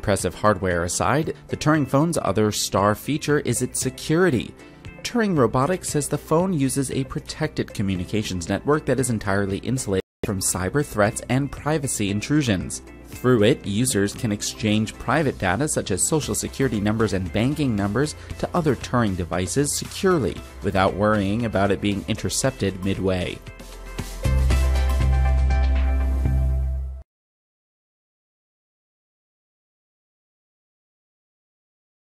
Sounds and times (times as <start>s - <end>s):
Speech: 0.0s - 23.4s
Music: 0.0s - 27.1s.